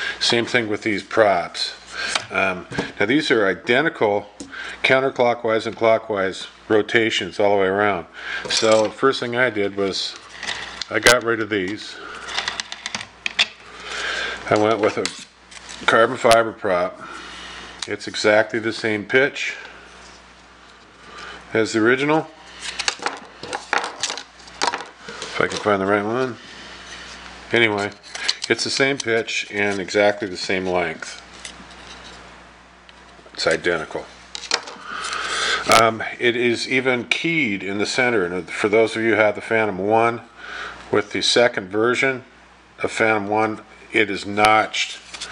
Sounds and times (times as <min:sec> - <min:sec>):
Inside, small room: 0:00.0 - 0:45.3
Speech: 0:00.2 - 0:10.2, 0:10.9 - 0:12.0, 0:14.4 - 0:15.2, 0:15.8 - 0:17.1, 0:17.8 - 0:19.6, 0:21.5 - 0:22.4, 0:25.4 - 0:26.4, 0:27.5 - 0:31.2, 0:33.3 - 0:34.1, 0:35.7 - 0:40.3, 0:40.9 - 0:45.1.